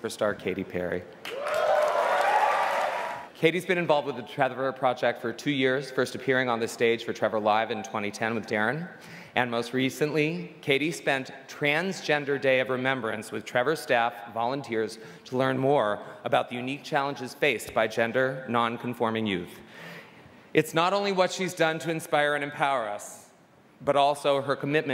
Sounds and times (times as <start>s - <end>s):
Male speech, man speaking: 0.0s - 1.1s, 3.4s - 19.6s, 20.6s - 24.9s
Narration, monologue: 0.0s - 1.4s, 3.2s - 24.9s.